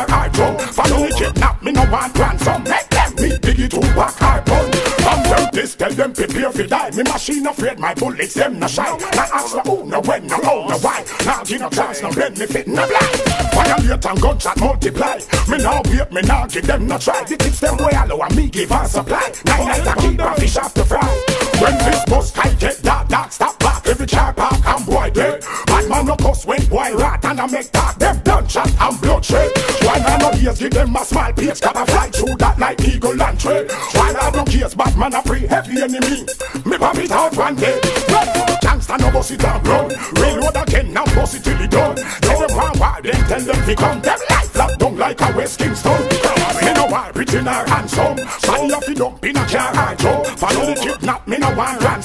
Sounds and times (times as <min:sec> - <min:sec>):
Music: 0:00.0 - 0:52.0.